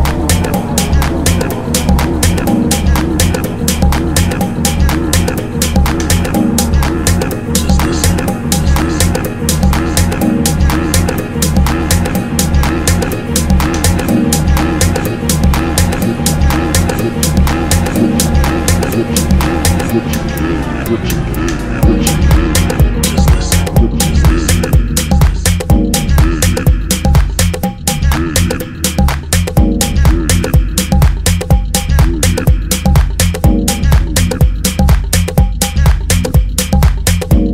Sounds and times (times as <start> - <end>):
Music: 0.0 - 37.5.